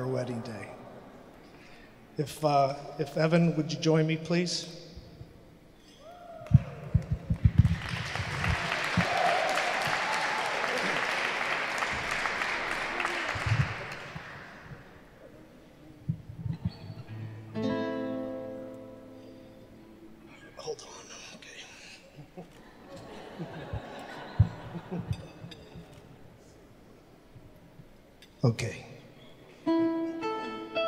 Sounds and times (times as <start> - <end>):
Speech: 0.0 - 0.8, 2.2 - 4.8, 28.4 - 29.0.